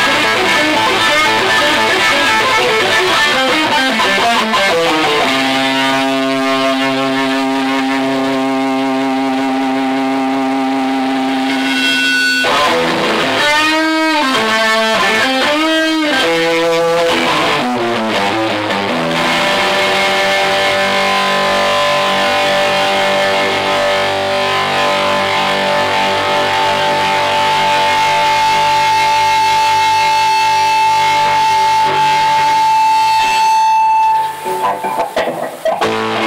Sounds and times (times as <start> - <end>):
Bass guitar: 0.0 - 36.2
Strum: 0.0 - 36.2.